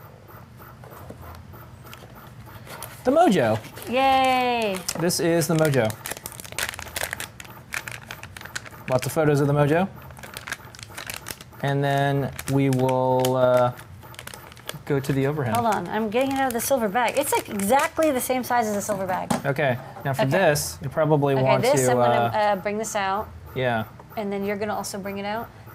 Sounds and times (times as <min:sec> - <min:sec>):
Crumpling, crinkling: 0:02.0 - 0:19.0.